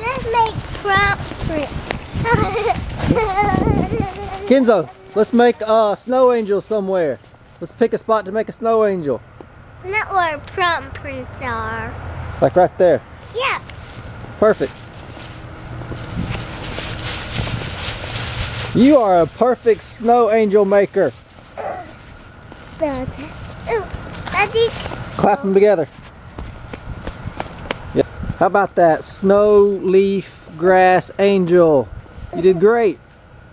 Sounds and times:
Child speech, kid speaking: 0.0 - 2.8, 9.8 - 12.0, 13.3 - 13.7, 22.8 - 25.7, 32.3 - 33.0.

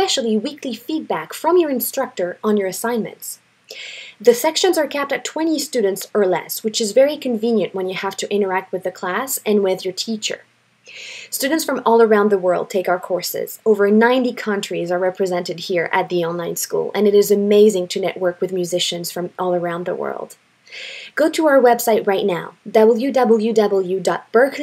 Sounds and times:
Speech: 0.0 - 3.4, 4.2 - 10.5, 11.3 - 20.4, 21.1 - 24.6.

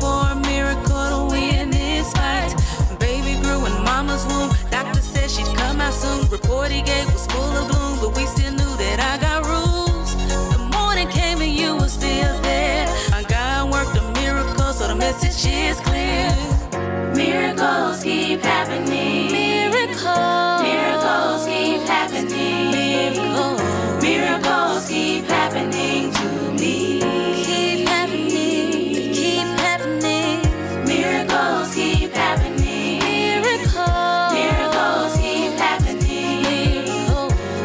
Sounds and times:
Rhythm and blues: 0.0 - 37.6.

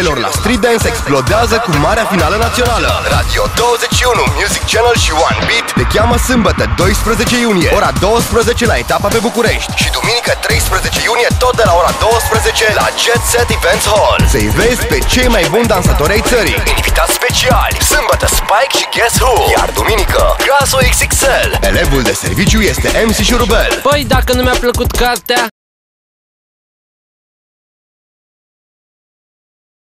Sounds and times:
Background music: 0.0 - 25.5
Speech: 0.0 - 25.5.

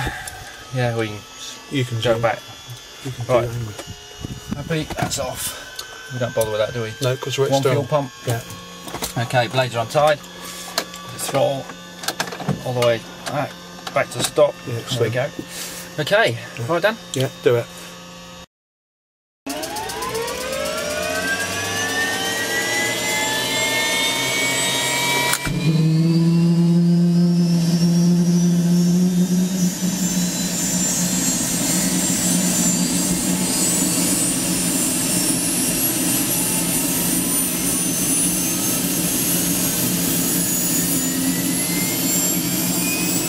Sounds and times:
Speech: 0.7 - 2.4, 3.1 - 3.8, 4.5 - 8.5, 9.1 - 10.2, 11.1 - 11.7, 12.5 - 15.4, 16.0 - 17.7.

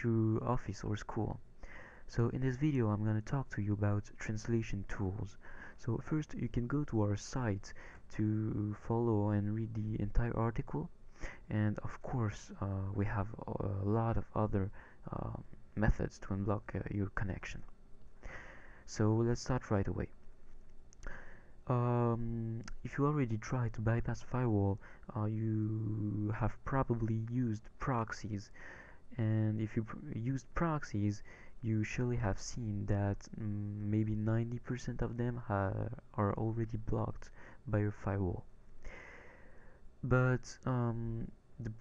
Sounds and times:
Speech: 0.0 - 1.4, 2.1 - 17.7, 18.9 - 20.2, 21.6 - 38.5, 40.0 - 41.8.

